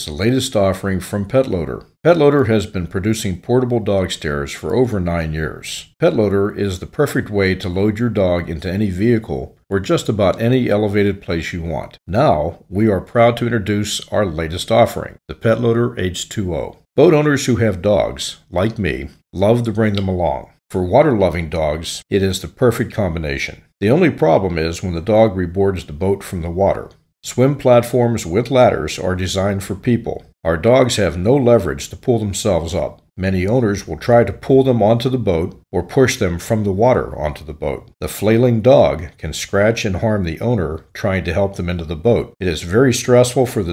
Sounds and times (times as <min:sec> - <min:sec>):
Speech: 0:00.0 - 0:43.7.